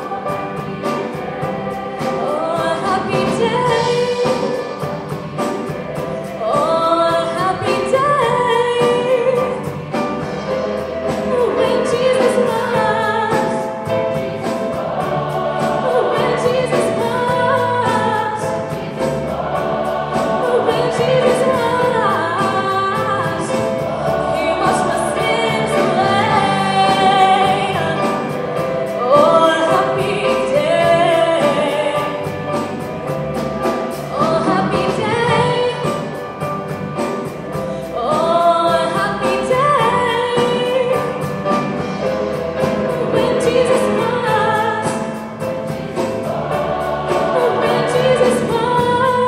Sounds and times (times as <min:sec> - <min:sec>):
Choir: 0:00.0 - 0:49.2.